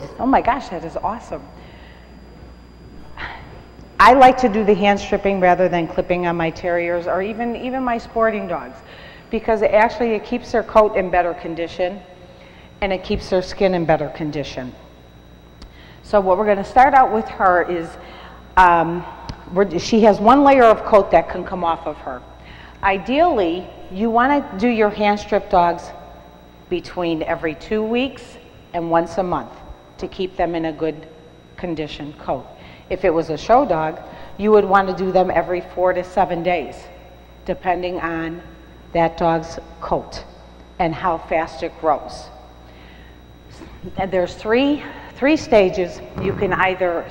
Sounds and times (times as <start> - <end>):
Speech: 0.0 - 1.5, 4.0 - 12.0, 12.8 - 14.8, 16.1 - 18.0, 18.6 - 22.2, 22.8 - 25.9, 26.7 - 31.0, 31.6 - 36.9, 39.0 - 42.3, 43.8 - 47.1.